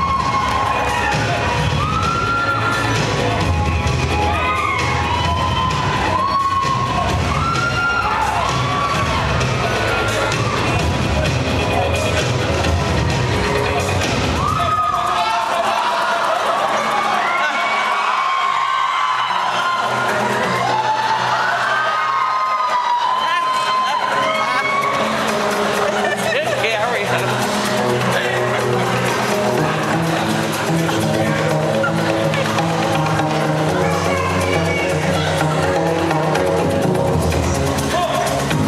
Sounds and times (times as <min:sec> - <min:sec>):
Music: 0:00.0 - 0:38.6.